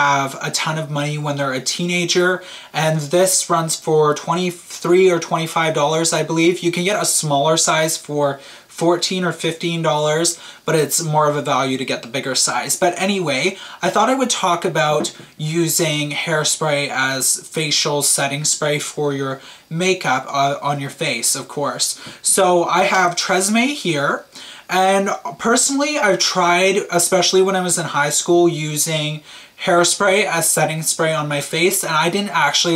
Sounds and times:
Speech: 0.0s - 32.7s.

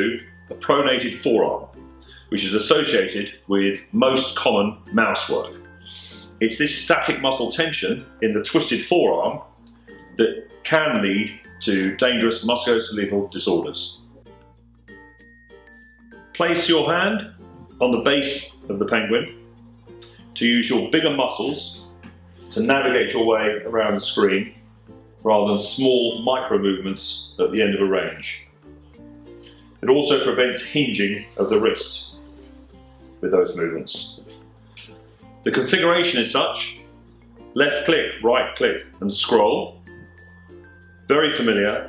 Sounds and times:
Speech: 0.0s - 1.7s, 2.3s - 9.5s, 10.2s - 14.0s, 16.4s - 19.4s, 20.4s - 21.9s, 22.5s - 24.6s, 25.2s - 28.5s, 29.8s - 32.2s, 33.2s - 34.4s, 35.4s - 36.9s, 37.6s - 39.8s, 41.1s - 41.8s
Music: 0.0s - 41.8s.

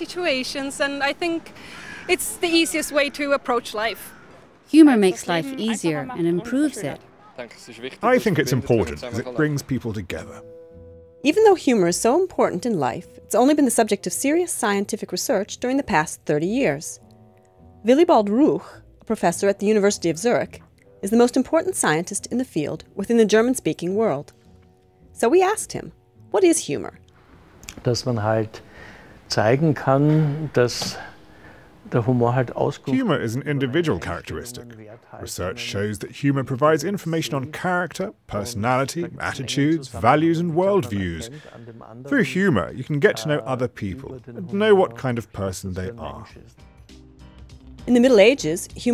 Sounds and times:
Music: 0.0s - 3.9s, 4.8s - 48.9s.

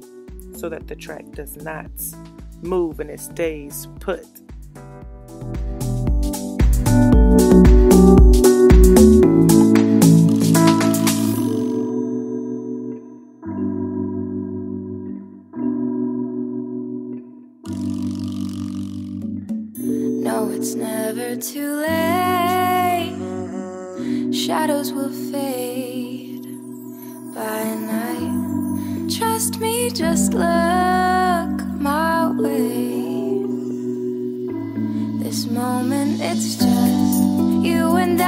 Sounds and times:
Music: 0.0s - 38.2s.

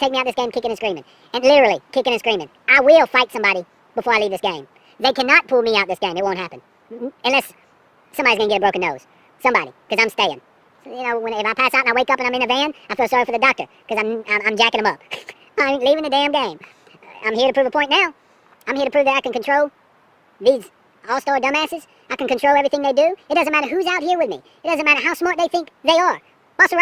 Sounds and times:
Speech: 0.0s - 7.6s, 8.2s - 19.7s, 20.4s - 26.8s.

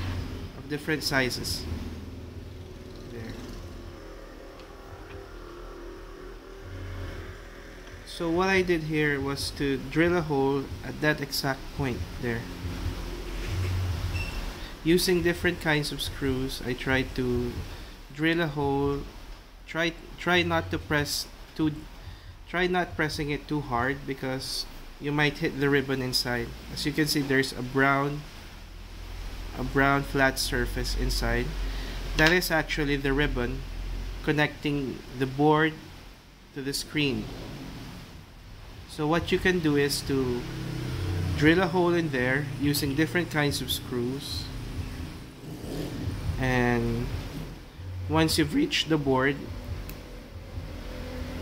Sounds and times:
Speech: 0.6s - 1.7s, 8.1s - 12.5s, 14.9s - 19.1s, 19.7s - 21.8s, 22.5s - 28.2s, 29.6s - 31.6s, 32.2s - 33.6s, 34.2s - 35.8s, 36.6s - 37.3s, 38.9s - 40.5s, 41.3s - 44.5s, 46.4s - 47.2s, 48.1s - 49.5s.

